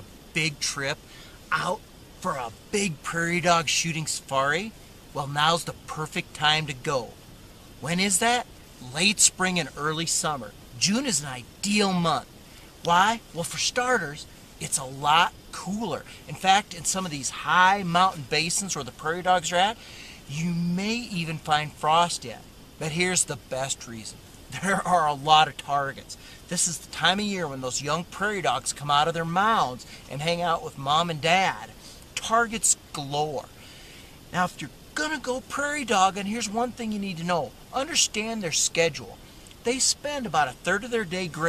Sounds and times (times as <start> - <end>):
Speech: 0.0 - 7.2, 7.8 - 33.6, 34.3 - 41.4.